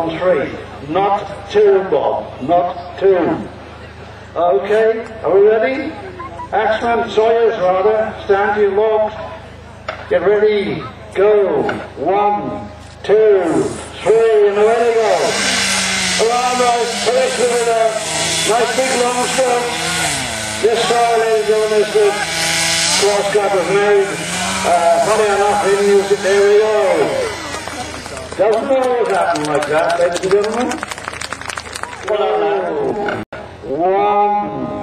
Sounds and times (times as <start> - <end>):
Sawing: 13.5 - 28.8.